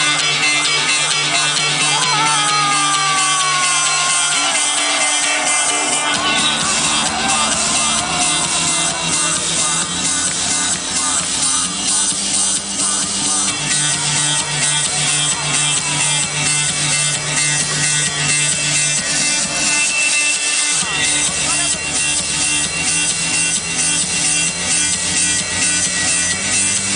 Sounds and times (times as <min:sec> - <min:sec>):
Techno: 0:00.0 - 0:26.9.